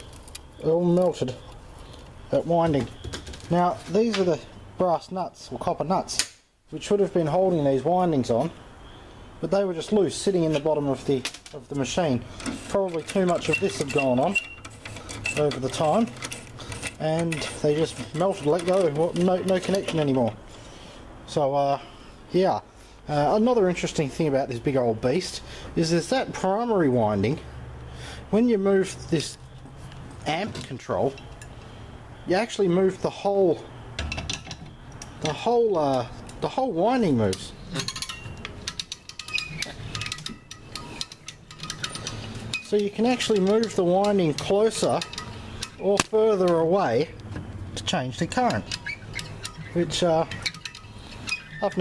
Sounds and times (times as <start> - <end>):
Speech: 0.6 - 1.4, 2.3 - 2.9, 3.5 - 8.6, 9.4 - 14.4, 15.4 - 16.2, 17.0 - 20.4, 21.3 - 27.5, 28.3 - 29.4, 30.2 - 31.2, 32.3 - 33.7, 35.2 - 37.6, 42.7 - 45.0, 45.8 - 47.2, 47.8 - 48.7, 49.7 - 50.3, 51.6 - 51.8.